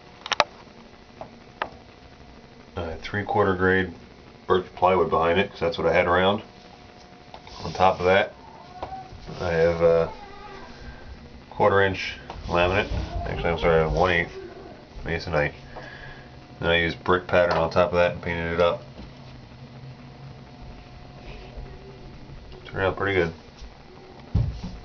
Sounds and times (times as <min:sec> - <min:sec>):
Speech: 0:02.8 - 0:06.5, 0:07.6 - 0:08.3, 0:09.3 - 0:10.2, 0:11.5 - 0:15.6, 0:16.6 - 0:18.9, 0:22.6 - 0:23.4.